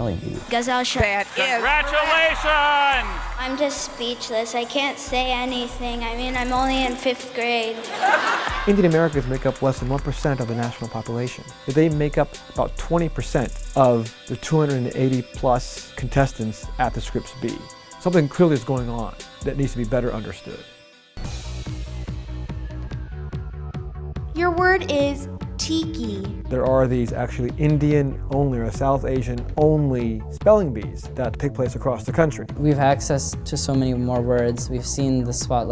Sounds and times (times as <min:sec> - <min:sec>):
Speech: 0:00.0 - 0:07.8, 0:08.6 - 0:20.6, 0:24.4 - 0:35.7
Music: 0:00.0 - 0:35.7.